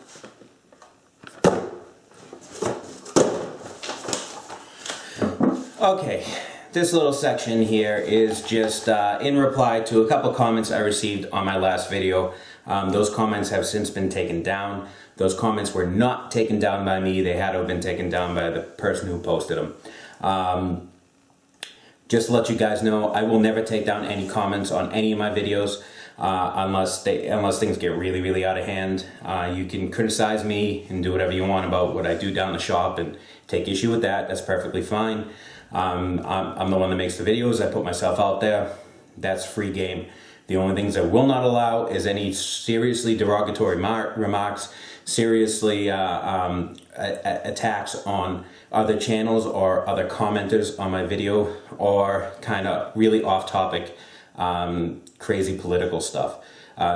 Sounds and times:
Speech: 5.8s - 21.0s, 22.1s - 56.9s.

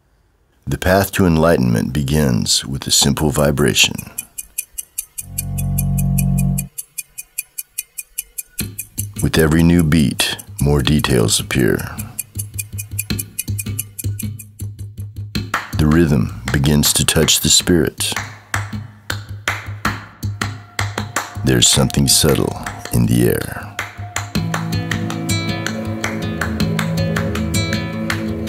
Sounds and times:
Speech: 0.6s - 4.2s, 9.2s - 12.2s, 15.8s - 18.2s, 21.4s - 23.8s
Music: 5.3s - 6.7s, 8.6s - 28.4s.

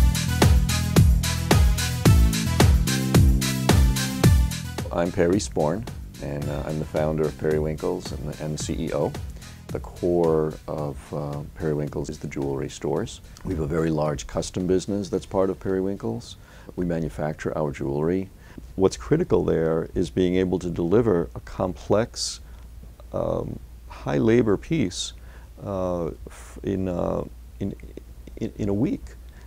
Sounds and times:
Music: 0.0s - 17.5s
Speech: 4.8s - 22.4s, 23.1s - 29.2s.

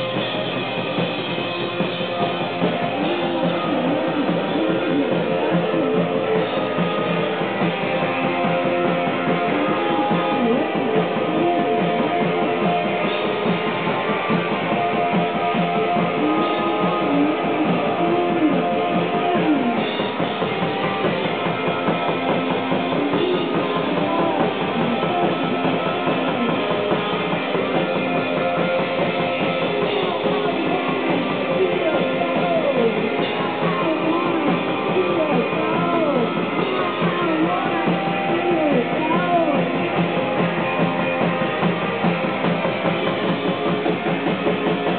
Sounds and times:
Music: 0.0s - 44.9s.

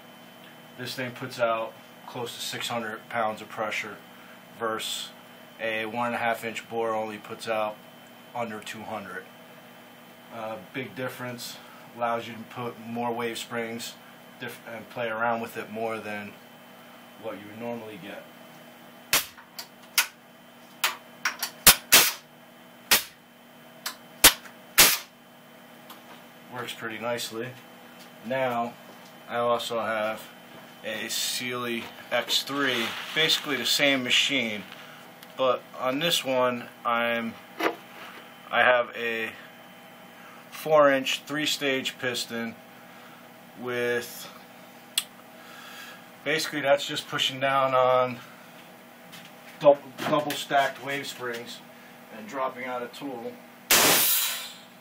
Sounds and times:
Speech: 0.8s - 4.0s, 4.6s - 9.3s, 10.3s - 16.4s, 17.2s - 18.3s, 26.5s - 27.6s, 28.2s - 34.8s, 35.4s - 37.4s, 38.5s - 39.5s, 40.6s - 42.6s, 43.6s - 44.4s, 46.2s - 48.3s, 49.6s - 53.4s.

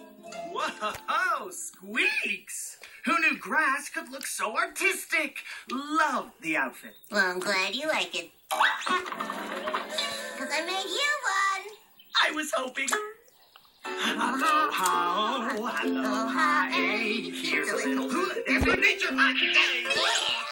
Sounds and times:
Music: 0.0s - 1.3s, 13.9s - 20.5s
Speech: 0.6s - 9.1s, 17.4s - 20.5s.

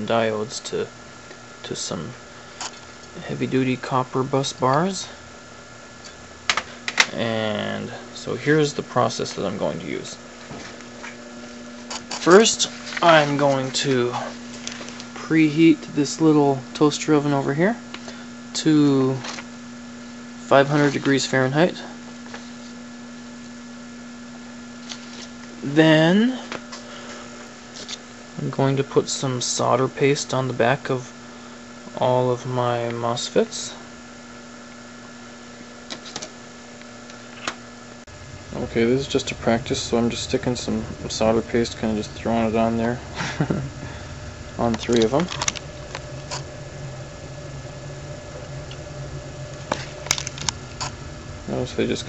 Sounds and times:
Speech: 0.0s - 0.9s, 1.6s - 2.2s, 3.2s - 5.2s, 7.1s - 10.2s, 12.2s - 14.4s, 15.2s - 17.8s, 18.6s - 19.3s, 20.4s - 22.0s, 25.6s - 26.6s, 28.4s - 31.2s, 31.9s - 33.8s, 38.6s - 43.1s, 44.6s - 45.4s, 51.5s - 52.0s.

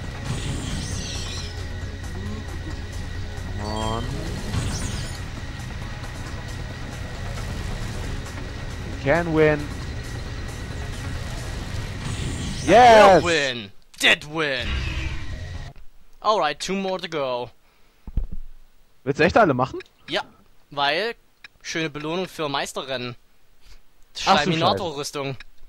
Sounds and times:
Music: 0.0s - 13.4s, 14.6s - 15.7s.

